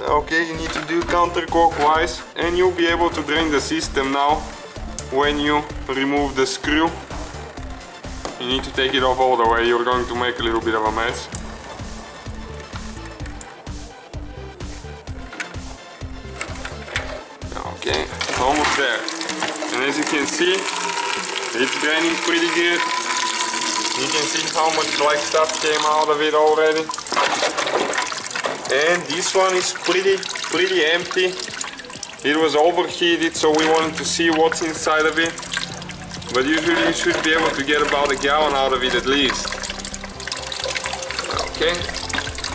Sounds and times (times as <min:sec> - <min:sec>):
Speech: 0:00.0 - 0:04.4, 0:05.1 - 0:07.0, 0:08.4 - 0:11.4, 0:17.5 - 0:19.1, 0:19.7 - 0:20.7, 0:21.6 - 0:22.8, 0:24.0 - 0:26.9, 0:28.7 - 0:31.5, 0:32.2 - 0:35.4, 0:36.3 - 0:39.5, 0:41.3 - 0:41.9
Water: 0:16.4 - 0:42.5
Pump (liquid): 0:18.1 - 0:42.5.